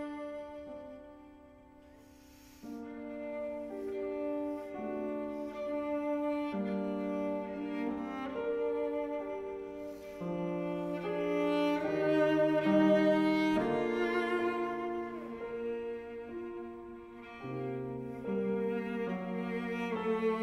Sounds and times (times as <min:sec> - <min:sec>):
Cello: 0:00.0 - 0:20.4.